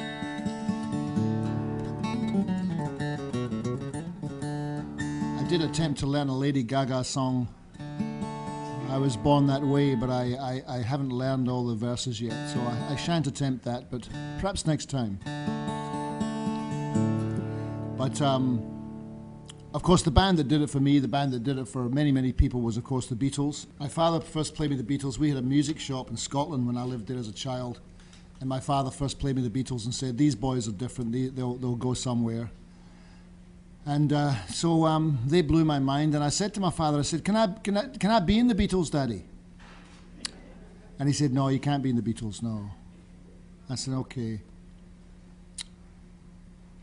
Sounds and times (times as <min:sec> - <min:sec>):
Music: 0:00.0 - 0:05.8, 0:07.8 - 0:10.3, 0:15.2 - 0:19.7
Speech: 0:05.4 - 0:07.6, 0:08.8 - 0:15.2, 0:18.0 - 0:18.6, 0:19.7 - 0:32.6, 0:33.8 - 0:39.3, 0:40.3 - 0:42.8, 0:43.7 - 0:44.5.